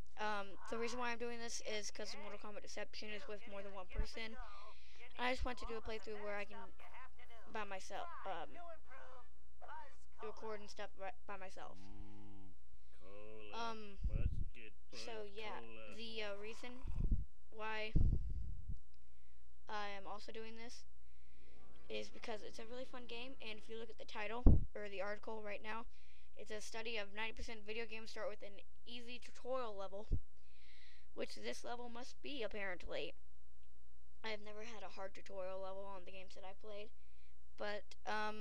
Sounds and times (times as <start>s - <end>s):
Speech: 0.2s - 11.8s, 13.1s - 17.0s, 17.6s - 18.1s, 19.7s - 20.8s, 21.6s - 30.1s, 31.2s - 33.1s, 34.3s - 36.9s, 37.6s - 38.4s.